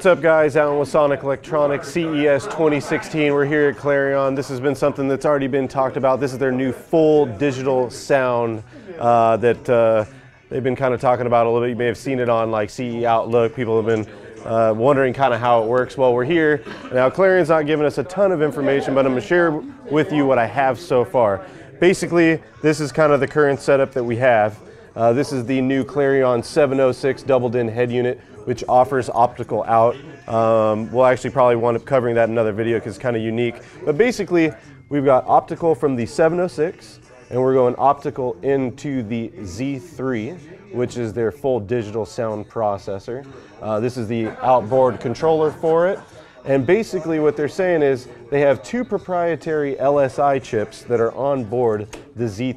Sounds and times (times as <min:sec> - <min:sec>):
Speech: 0:00.0 - 0:52.5.